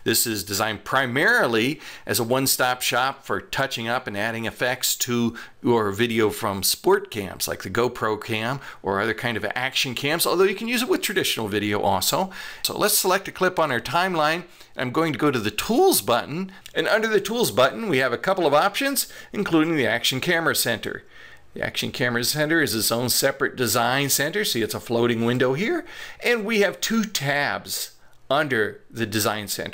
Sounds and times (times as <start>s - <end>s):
Speech: 0.0s - 29.7s.